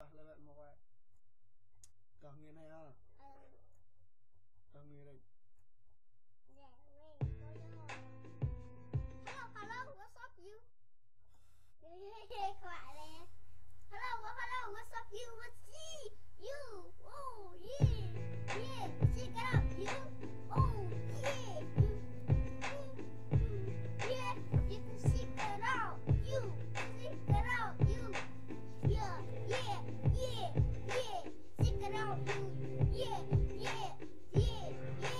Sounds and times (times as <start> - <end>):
Music: 7.2 - 10.0, 17.8 - 35.1
Child singing: 14.0 - 35.1.